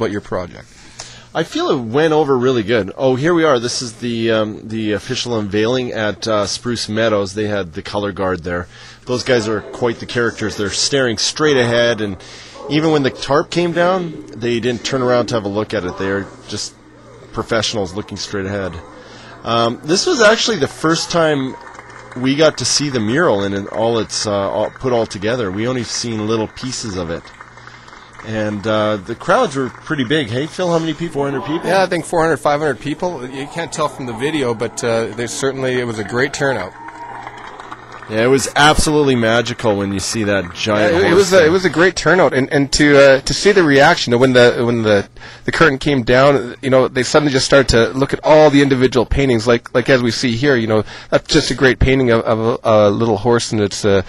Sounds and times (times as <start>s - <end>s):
Speech: 0.0s - 0.7s, 1.4s - 21.6s, 22.2s - 27.3s, 28.2s - 36.8s, 38.1s - 54.0s.